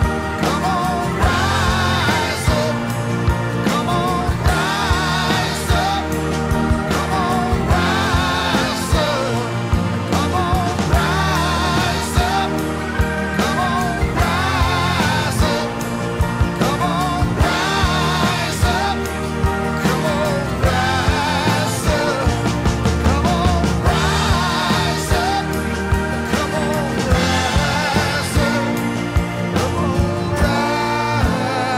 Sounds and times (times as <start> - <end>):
Rock music: 0.0 - 31.7.